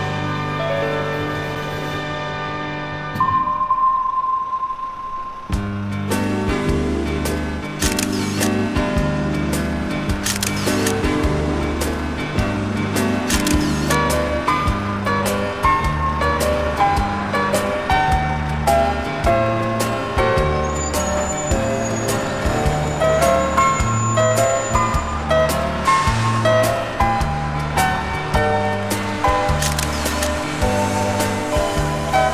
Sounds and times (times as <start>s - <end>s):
Music: 0.0s - 32.3s.